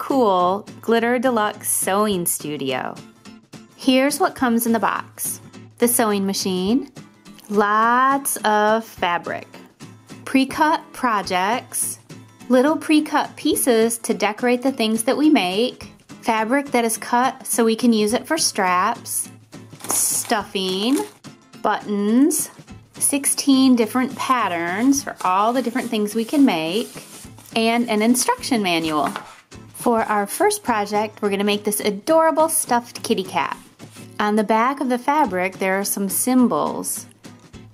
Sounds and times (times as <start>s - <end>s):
Speech: 0.0s - 3.0s, 3.8s - 9.6s, 10.3s - 19.3s, 19.9s - 27.0s, 27.6s - 29.2s, 29.8s - 33.6s, 34.2s - 37.1s
Music: 0.0s - 37.7s.